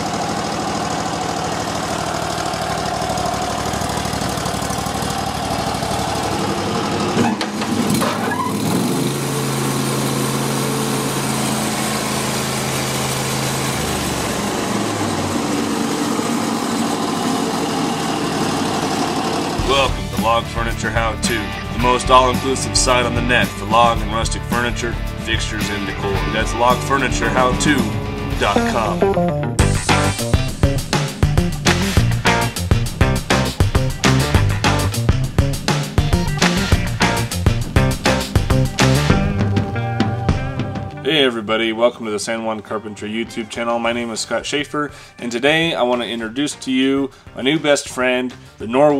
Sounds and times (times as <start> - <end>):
Heavy engine (low frequency): 0.0 - 28.6.